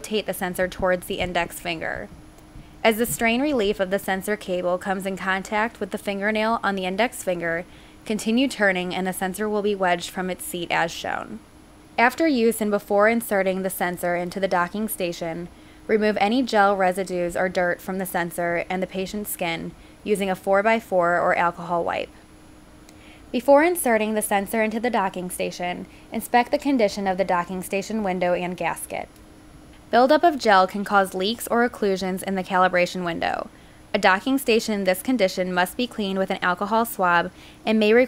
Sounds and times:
Speech: 0.0 - 2.1, 2.8 - 11.4, 12.0 - 22.2, 23.4 - 29.1, 29.9 - 38.0.

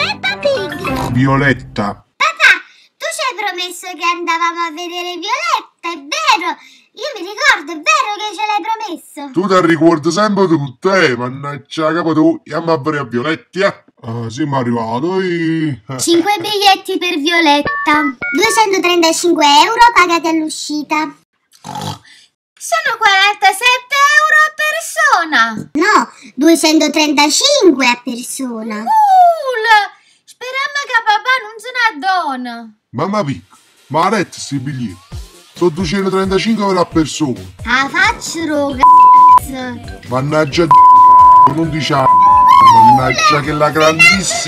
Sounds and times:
Oink: 0.8 - 1.3, 21.6 - 22.1.

